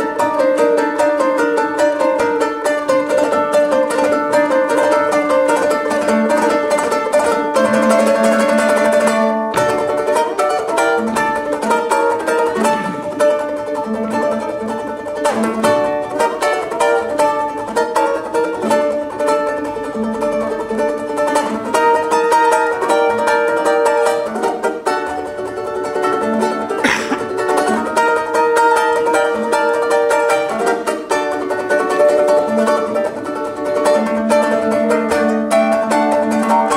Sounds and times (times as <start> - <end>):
Guitar: 0.0 - 36.7
Ukulele: 0.0 - 36.7.